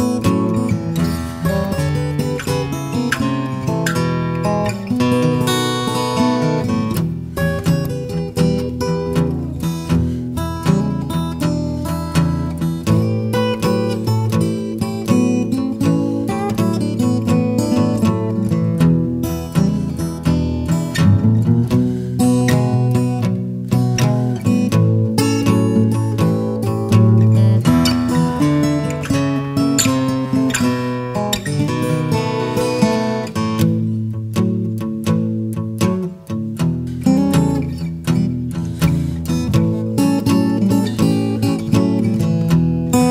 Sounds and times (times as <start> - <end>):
Music: 0.0 - 43.1.